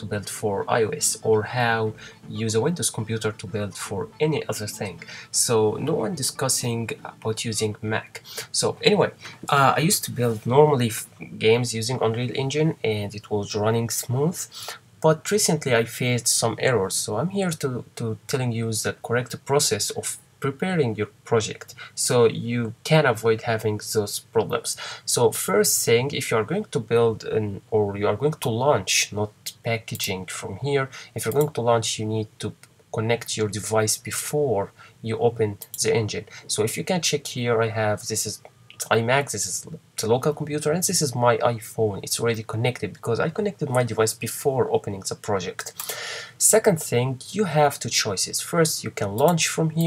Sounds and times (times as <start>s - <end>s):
Speech: 0.0s - 49.8s.